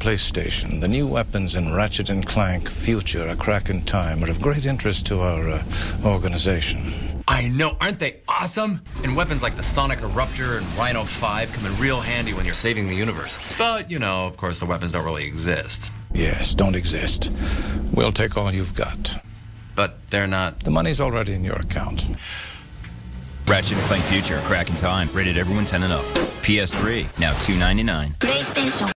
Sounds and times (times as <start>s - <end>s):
Speech: 0.0s - 17.3s, 17.9s - 22.2s, 23.5s - 28.9s
Music: 23.5s - 28.9s.